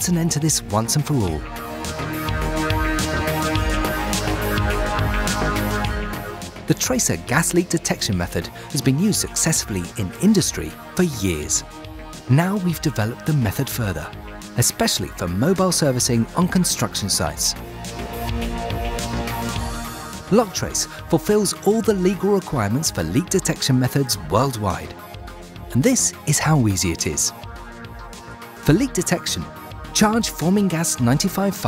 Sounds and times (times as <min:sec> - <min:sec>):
Speech: 0:00.0 - 0:01.4, 0:06.7 - 0:11.6, 0:12.3 - 0:17.6, 0:20.3 - 0:24.9, 0:25.7 - 0:27.3, 0:28.6 - 0:31.6
Music: 0:00.0 - 0:31.6.